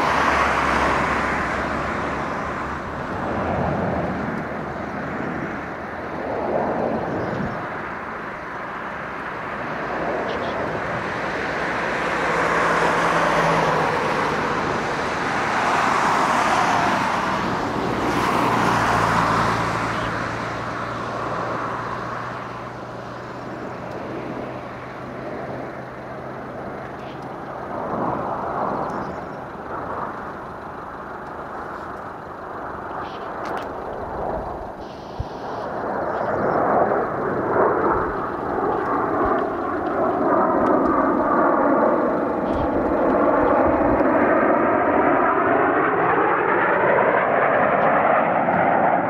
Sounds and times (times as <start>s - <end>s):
Fixed-wing aircraft, airplane: 0.0s - 49.0s.